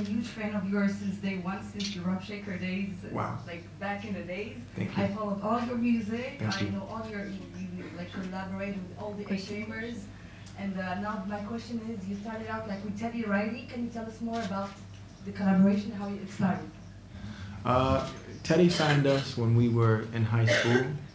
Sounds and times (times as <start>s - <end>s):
Speech: 0.0s - 16.8s, 17.6s - 21.0s.